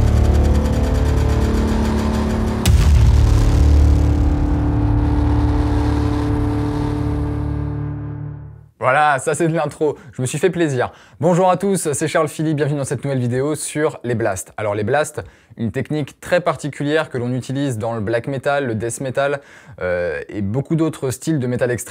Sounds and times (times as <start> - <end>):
Music: 0.0 - 8.8
Speech: 8.8 - 21.9.